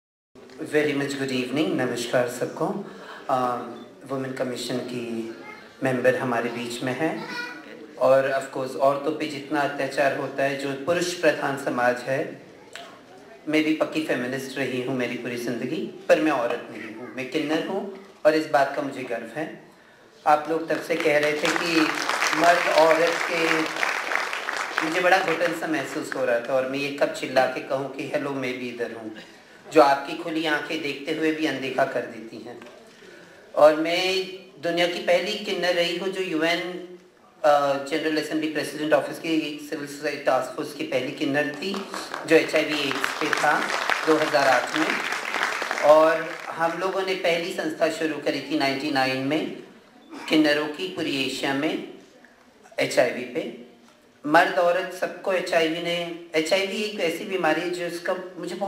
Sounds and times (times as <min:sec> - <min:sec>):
Narration, monologue: 0:00.4 - 0:58.6
Male speech, man speaking: 0:00.5 - 0:12.4, 0:13.4 - 0:19.6, 0:20.2 - 0:23.8, 0:24.8 - 0:32.7, 0:33.6 - 0:45.1, 0:45.8 - 0:52.0, 0:52.7 - 0:58.6.